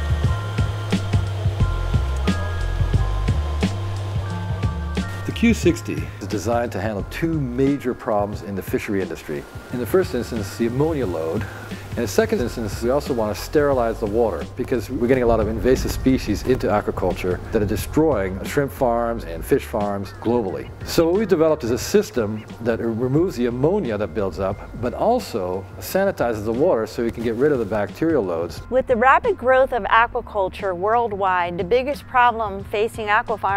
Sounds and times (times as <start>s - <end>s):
Music: 0.0s - 33.5s
Speech: 5.3s - 11.4s, 12.0s - 33.5s.